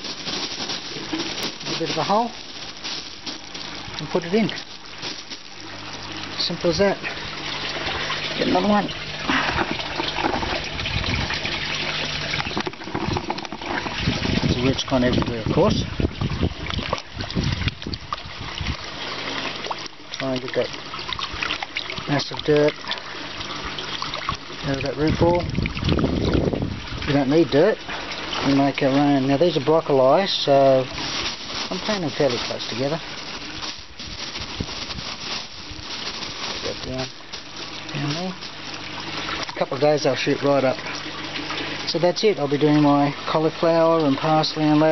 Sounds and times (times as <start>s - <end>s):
Speech: 1.7s - 2.4s, 4.0s - 4.6s, 6.4s - 7.1s, 8.4s - 8.9s, 14.5s - 15.9s, 20.2s - 20.7s, 22.1s - 22.8s, 24.6s - 25.5s, 27.1s - 27.8s, 28.4s - 30.9s, 31.7s - 33.0s, 36.6s - 37.2s, 37.9s - 38.4s, 39.6s - 40.8s, 41.9s - 44.9s.